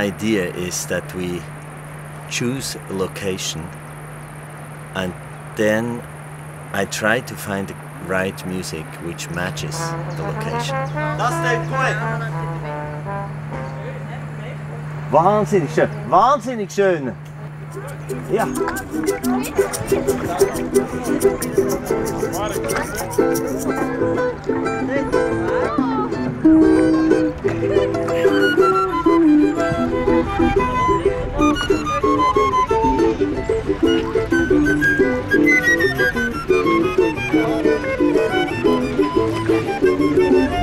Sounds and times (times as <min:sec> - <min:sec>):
Speech: 0:00.0 - 0:01.5, 0:02.3 - 0:03.7, 0:05.0 - 0:06.0, 0:06.8 - 0:12.4, 0:17.8 - 0:21.5.